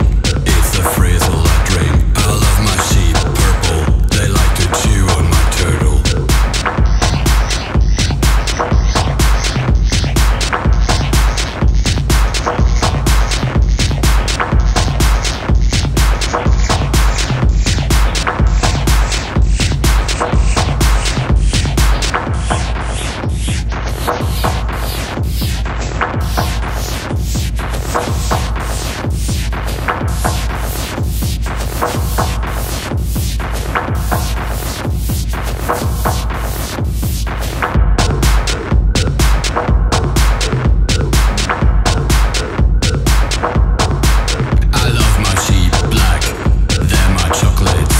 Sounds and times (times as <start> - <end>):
Music: 0.0 - 47.9.